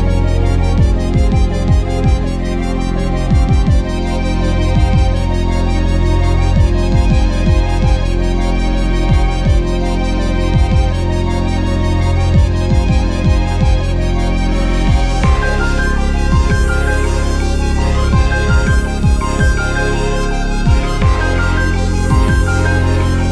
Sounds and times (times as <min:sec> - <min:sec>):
Soundtrack music: 0:00.0 - 0:23.3.